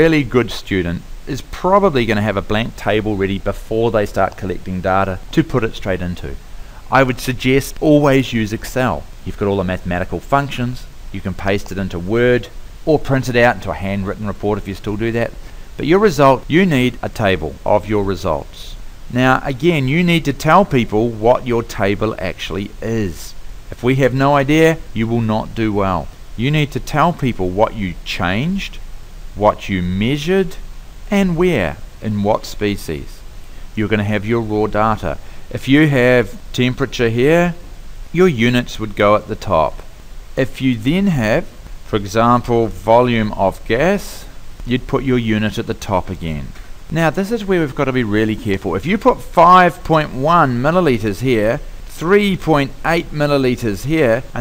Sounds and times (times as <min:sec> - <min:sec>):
Speech: 0:00.0 - 0:28.8, 0:29.4 - 0:33.2, 0:33.8 - 0:54.4.